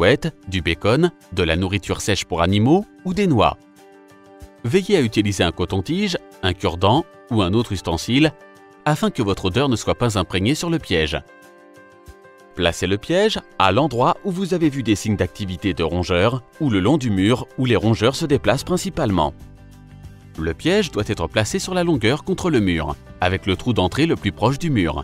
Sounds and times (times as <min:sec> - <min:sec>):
Speech: 0:00.0 - 0:03.6, 0:04.6 - 0:11.2, 0:12.6 - 0:19.4, 0:20.4 - 0:25.0
Music: 0:00.0 - 0:25.0.